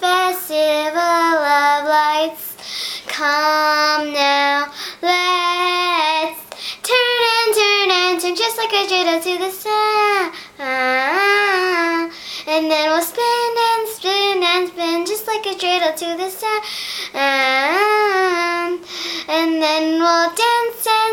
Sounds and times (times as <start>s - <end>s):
Child singing: 0.0s - 21.1s.